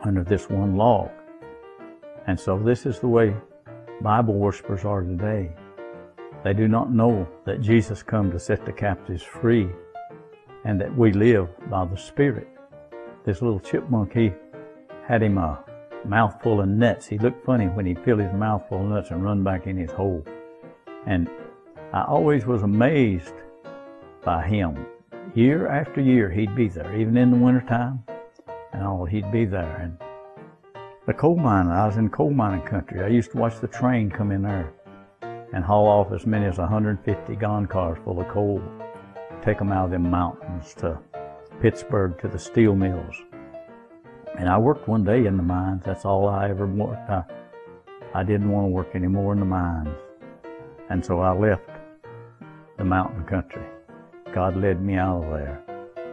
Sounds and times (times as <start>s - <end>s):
Speech: 0.0s - 1.1s, 2.2s - 5.6s, 6.4s - 9.8s, 10.6s - 12.5s, 13.2s - 14.4s, 15.0s - 20.3s, 21.0s - 23.4s, 24.3s - 28.1s, 28.7s - 30.0s, 31.1s - 34.7s, 35.5s - 38.7s, 39.4s - 41.0s, 41.6s - 43.3s, 44.4s - 47.3s, 48.1s - 50.0s, 50.9s - 51.8s, 52.8s - 55.6s
Music: 0.0s - 56.1s.